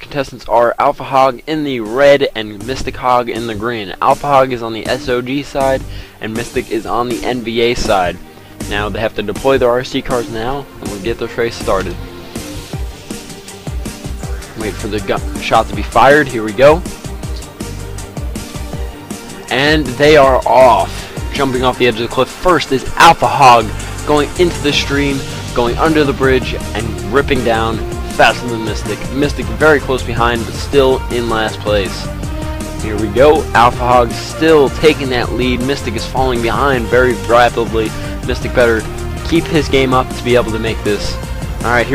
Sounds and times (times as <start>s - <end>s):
Speech: 0.0s - 12.0s, 14.6s - 16.9s, 19.5s - 32.1s, 32.8s - 41.9s
Music: 0.0s - 41.9s.